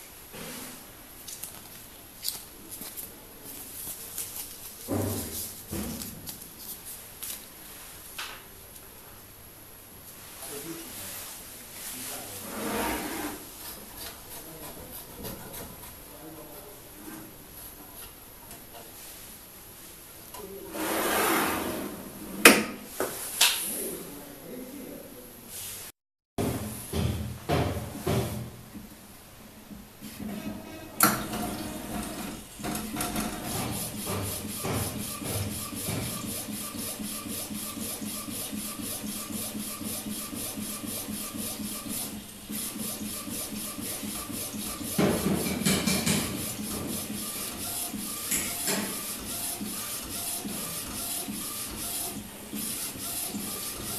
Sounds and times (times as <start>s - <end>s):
Speech: 10.4s - 12.8s, 16.1s - 17.2s, 23.7s - 25.5s.